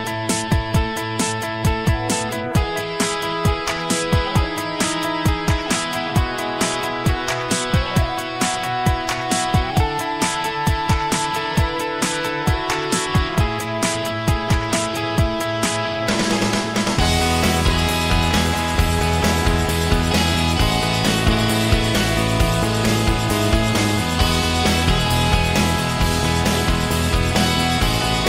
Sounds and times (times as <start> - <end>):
Music: 0.0 - 28.2.